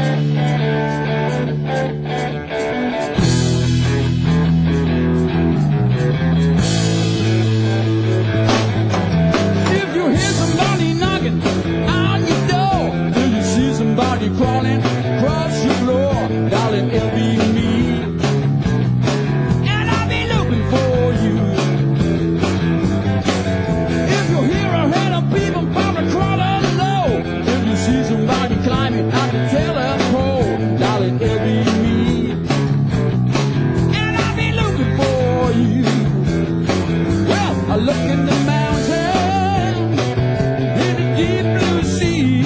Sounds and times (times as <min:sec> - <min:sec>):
Blues: 0:00.0 - 0:42.4.